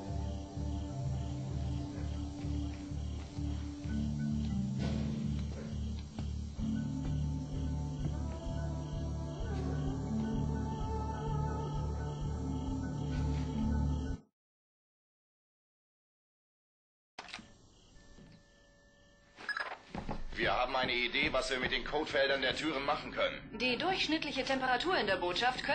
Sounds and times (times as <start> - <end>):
Music: 0.0 - 14.3, 20.0 - 25.7.